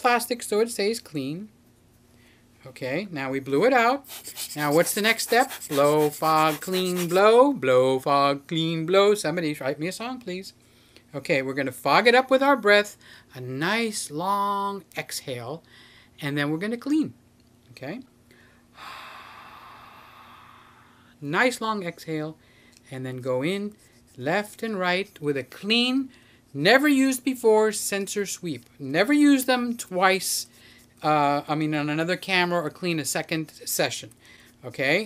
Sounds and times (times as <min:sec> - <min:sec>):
Speech: 0:00.0 - 0:01.5, 0:02.6 - 0:15.6, 0:16.2 - 0:18.1, 0:21.2 - 0:35.0.